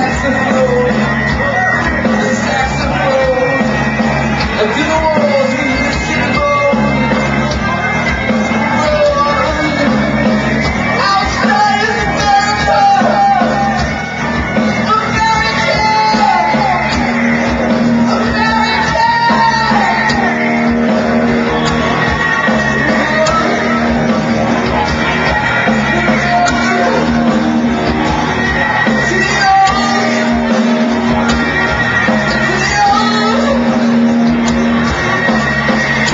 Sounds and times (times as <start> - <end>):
Music: 0.0 - 36.1.